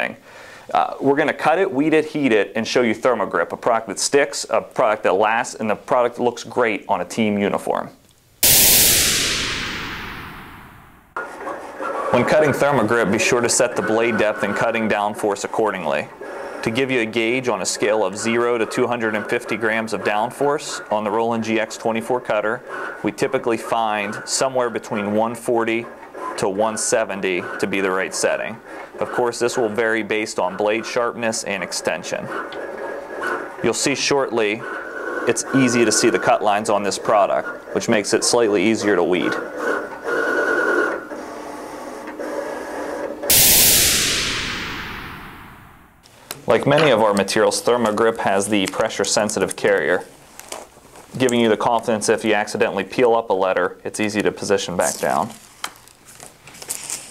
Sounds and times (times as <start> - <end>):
Speech: 0.0 - 8.0, 12.1 - 32.3, 33.6 - 34.6, 35.3 - 39.5, 46.4 - 50.1, 51.1 - 55.4.